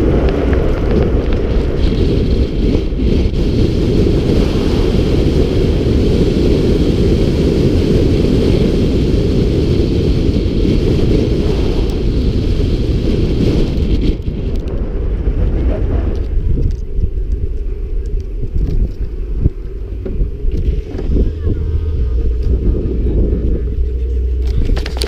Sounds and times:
Vehicle: 0.0s - 25.0s.

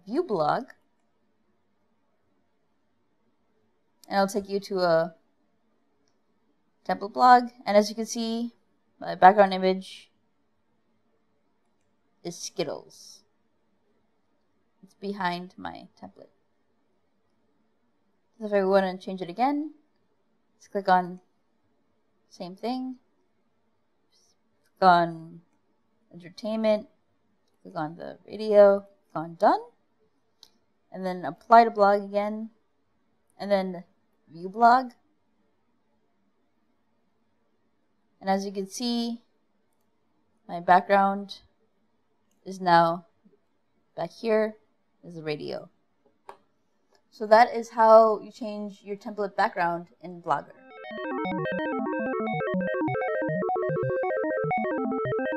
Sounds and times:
Narration, monologue: 0.0s - 50.7s.

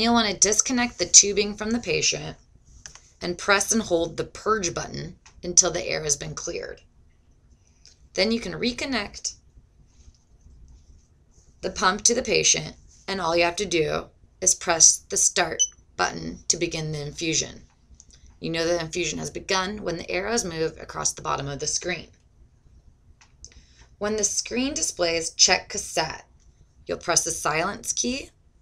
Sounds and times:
Speech: 0.0s - 2.4s, 3.2s - 6.8s, 8.2s - 9.4s, 11.6s - 17.6s, 18.4s - 22.1s, 24.0s - 26.2s, 26.9s - 28.3s.

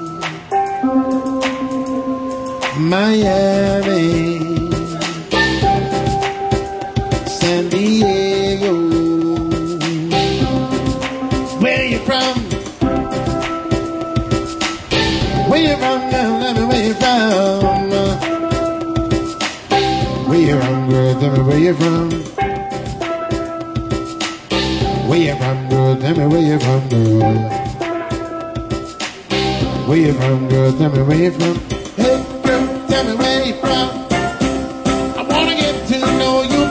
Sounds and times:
Drum: 2.6s - 36.7s.

